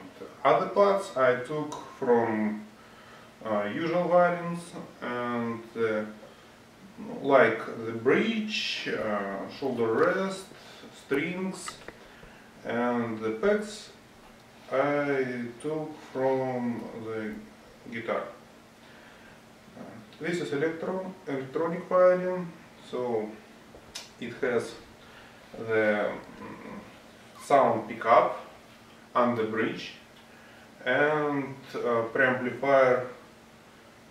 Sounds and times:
Speech: 0.0 - 2.7, 3.4 - 6.2, 6.8 - 11.9, 12.6 - 14.0, 14.7 - 18.4, 19.8 - 23.4, 24.2 - 24.9, 25.6 - 30.1, 30.8 - 33.2.

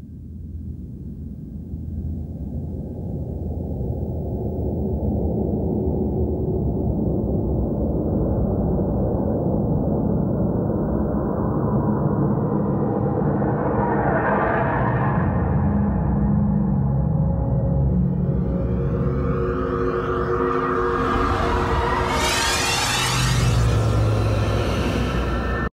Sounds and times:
Music: 15.8 - 22.6.

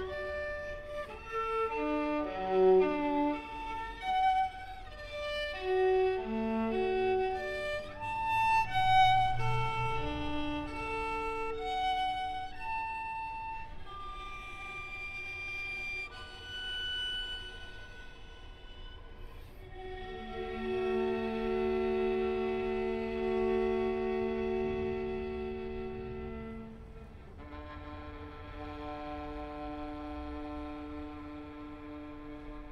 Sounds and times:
Violin, fiddle: 0.0 - 32.7.

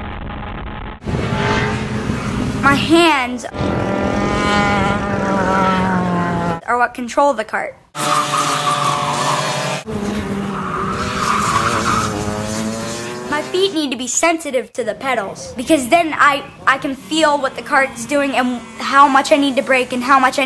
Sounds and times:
Speech: 2.6 - 3.6, 6.6 - 7.8, 13.3 - 20.4.

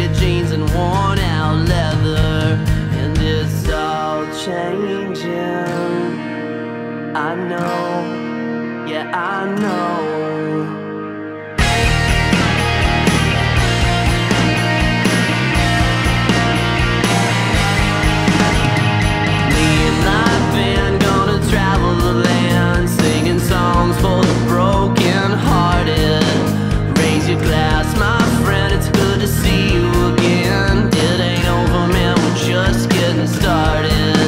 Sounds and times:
Exciting music: 11.6 - 34.2.

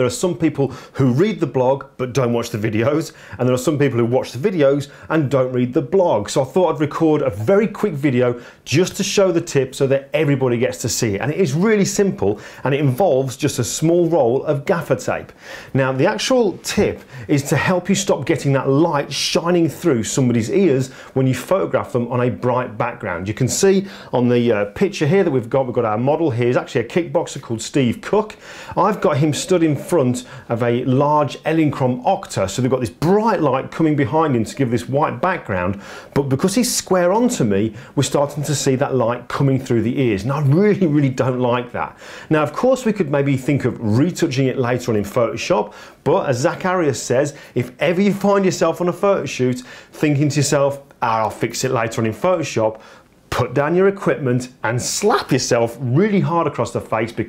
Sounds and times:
Speech: 0.0 - 57.2.

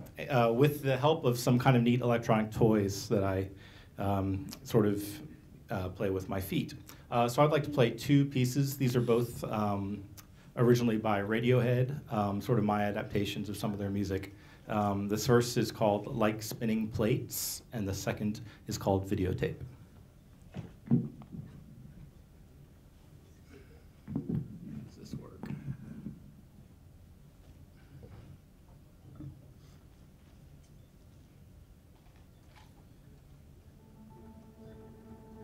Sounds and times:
Speech: 0.1 - 19.7, 24.8 - 25.5.

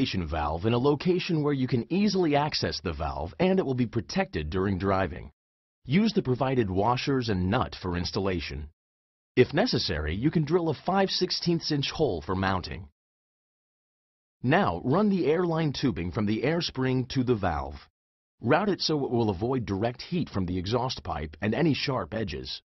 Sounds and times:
Speech: 0.0 - 8.8, 9.4 - 12.9, 14.4 - 22.7.

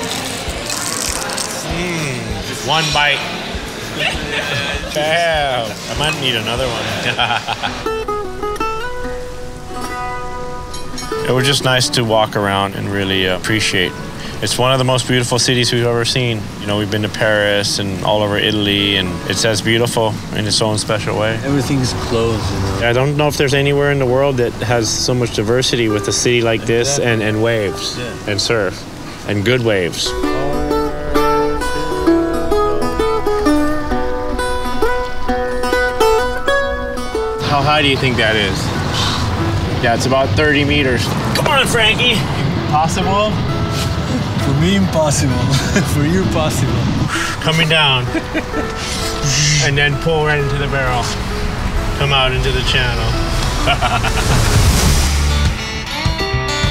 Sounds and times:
Music: 0.0 - 56.7.

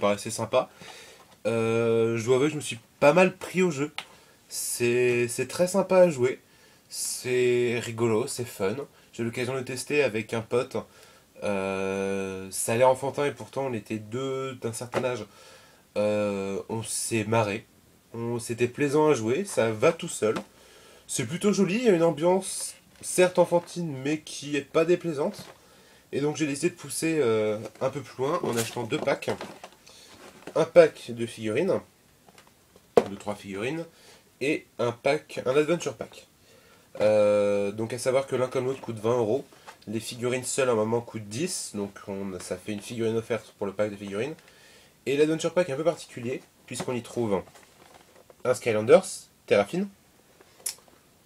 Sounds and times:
Speech: 0.0 - 0.7, 1.4 - 15.3, 16.0 - 20.5, 21.1 - 25.5, 26.1 - 29.6, 30.5 - 31.9, 33.0 - 36.3, 37.0 - 44.4, 45.1 - 47.5, 48.4 - 50.0.

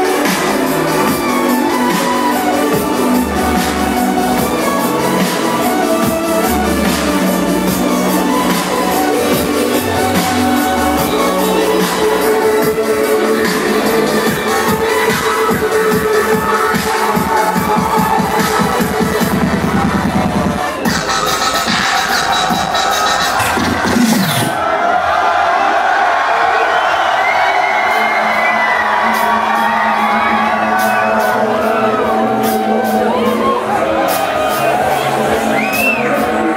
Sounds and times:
Dubstep: 0.0 - 24.6.

